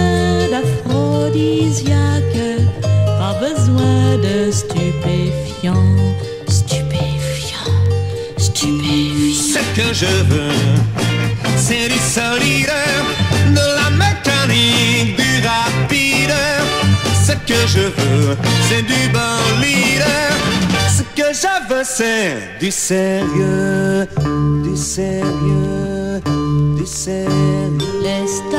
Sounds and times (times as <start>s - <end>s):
Psychedelic rock: 0.0s - 21.4s.